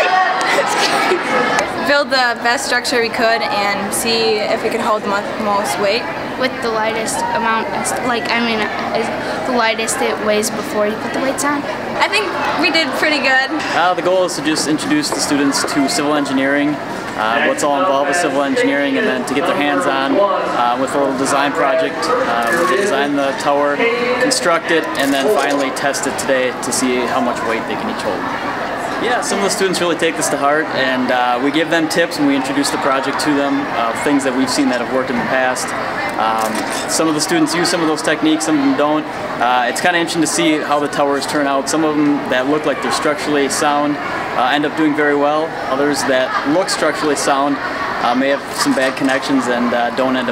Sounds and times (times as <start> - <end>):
Speech: 17.2 - 28.0.